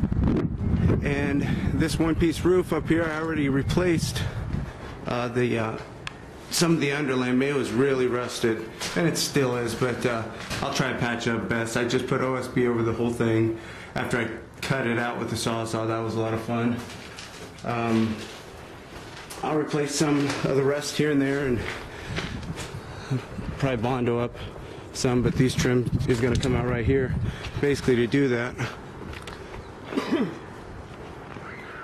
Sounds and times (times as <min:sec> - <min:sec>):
Speech: 0:01.0 - 0:04.4, 0:05.1 - 0:05.9, 0:06.5 - 0:16.9, 0:17.6 - 0:18.3, 0:19.4 - 0:21.8, 0:23.6 - 0:24.4, 0:25.0 - 0:28.8.